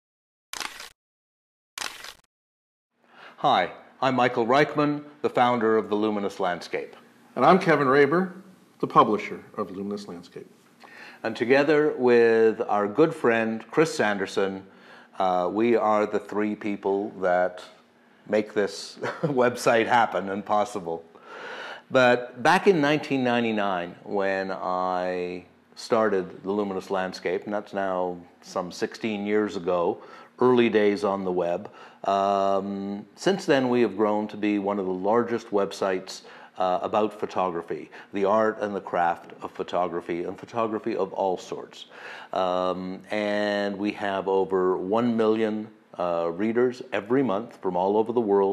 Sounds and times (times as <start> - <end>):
Single-lens reflex camera: 0.6 - 1.0, 1.8 - 2.3
Speech: 3.4 - 10.5, 11.2 - 21.1, 21.9 - 48.5.